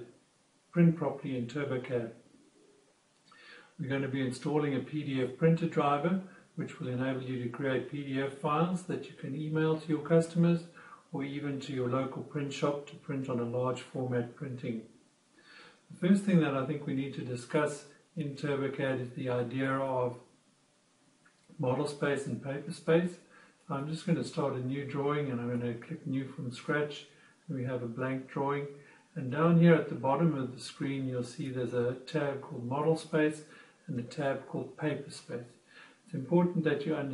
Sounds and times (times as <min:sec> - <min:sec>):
Speech: 0:00.0 - 0:02.2, 0:03.8 - 0:14.9, 0:15.9 - 0:20.2, 0:21.5 - 0:37.1.